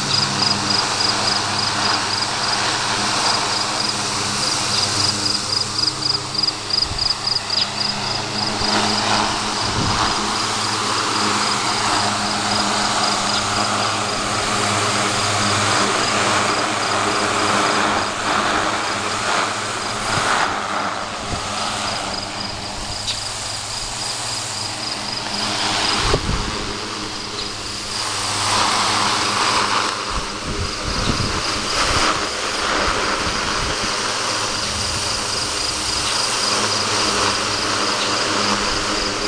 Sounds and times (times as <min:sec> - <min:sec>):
Mechanical fan: 0:00.0 - 0:39.2.